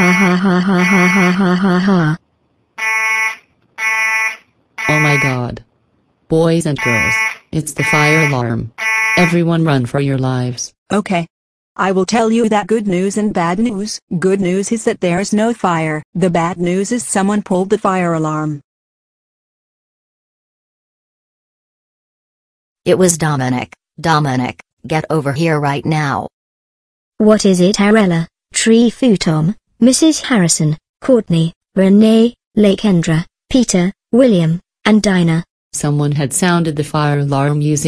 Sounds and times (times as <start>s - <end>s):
Speech: 0.0s - 2.2s, 4.8s - 5.6s, 6.3s - 18.6s, 22.9s - 26.3s, 27.2s - 37.8s.